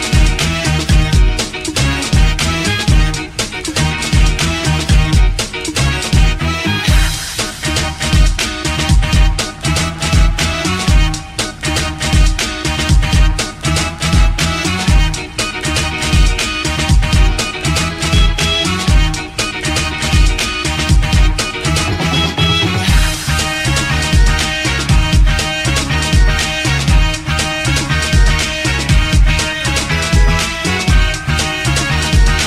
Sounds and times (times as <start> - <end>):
Music: 0.0 - 32.4.